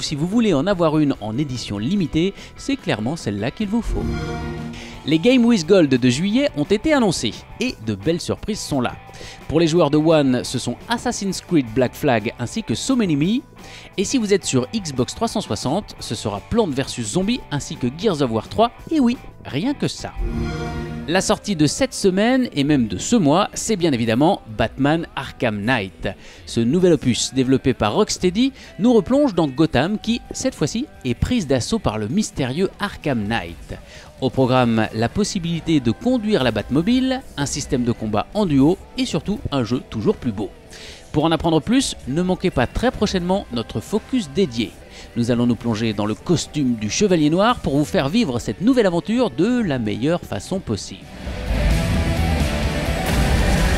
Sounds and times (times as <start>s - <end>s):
Speech: 0.0s - 4.1s, 5.0s - 20.2s, 21.1s - 40.5s, 41.1s - 51.1s
Music: 0.0s - 53.7s.